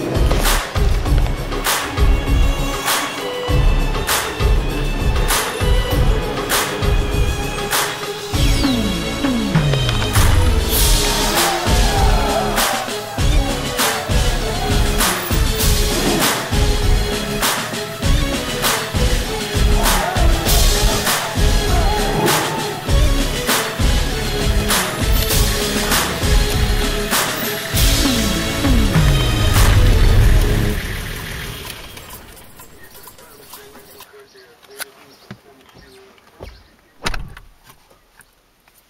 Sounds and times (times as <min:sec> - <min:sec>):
Music: 0:00.0 - 0:34.0
Car: 0:29.2 - 0:32.6
Speech: 0:32.8 - 0:36.3.